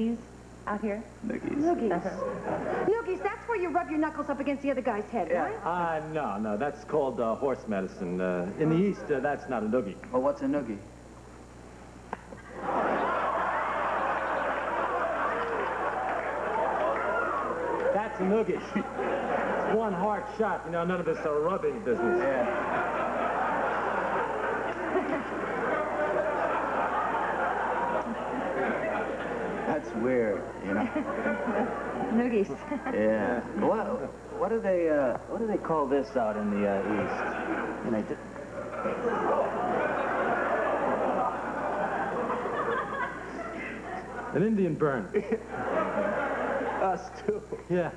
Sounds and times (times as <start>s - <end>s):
Male speech, man speaking: 1.2s - 2.2s, 5.5s - 10.9s, 17.9s - 18.8s, 19.6s - 22.6s, 29.7s - 31.0s, 32.9s - 38.2s, 44.3s - 45.4s, 46.8s - 47.9s.